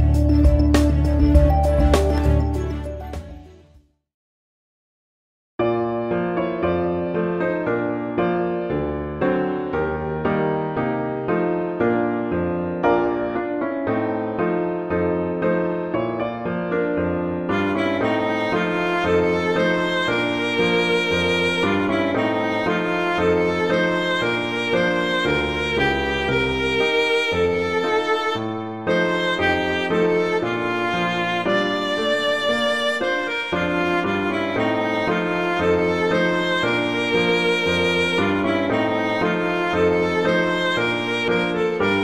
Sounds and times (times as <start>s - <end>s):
Violin, fiddle: 17.5s - 42.0s.